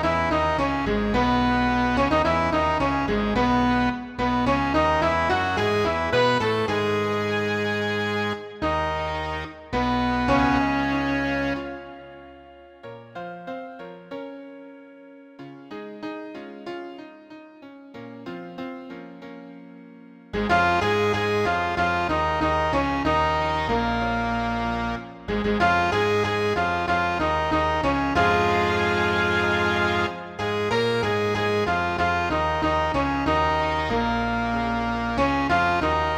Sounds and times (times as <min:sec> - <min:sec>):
Musical instrument: 0:00.0 - 0:36.1.